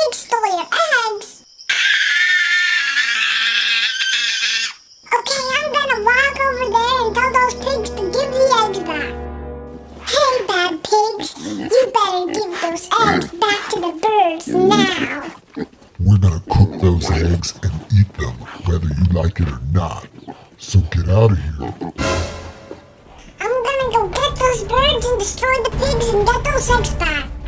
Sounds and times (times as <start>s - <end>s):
Music: 5.4s - 10.8s, 22.0s - 27.4s
Speech: 10.1s - 15.3s, 16.0s - 21.8s, 23.4s - 27.3s.